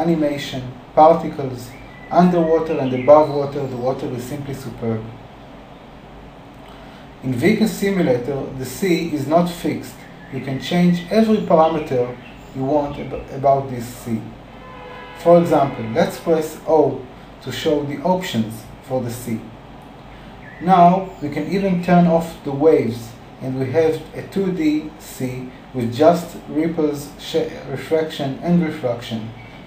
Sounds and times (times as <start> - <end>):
Speech: 0.0 - 5.2, 7.2 - 14.4, 15.2 - 19.5, 20.6 - 29.4.